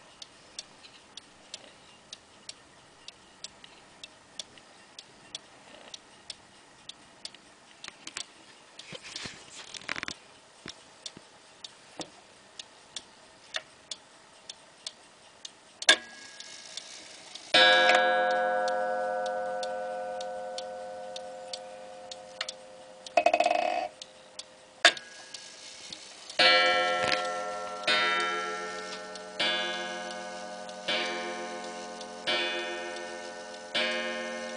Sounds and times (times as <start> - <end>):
Tick-tock: 10.4 - 34.5.